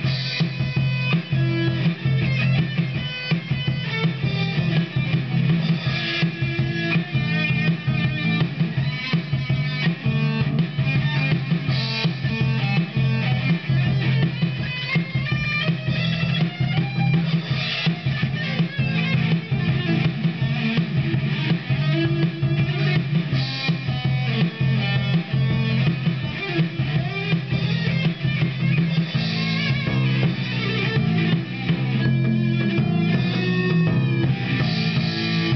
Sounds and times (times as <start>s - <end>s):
Drum machine: 0.0s - 35.5s
Guitar: 0.0s - 35.5s.